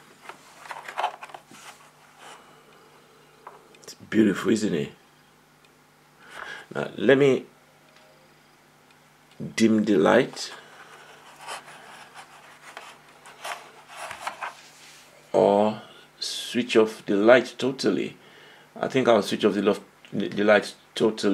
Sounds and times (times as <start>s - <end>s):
Speech: 3.8s - 5.0s, 6.7s - 7.5s, 9.4s - 10.6s, 15.3s - 18.2s, 18.8s - 21.3s.